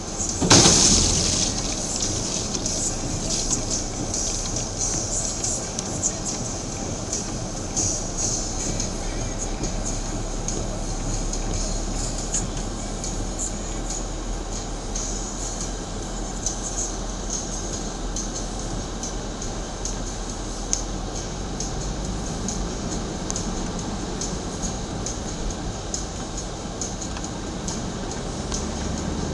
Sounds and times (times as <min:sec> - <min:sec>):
Car: 0:00.0 - 0:29.3
Music: 0:00.0 - 0:29.3.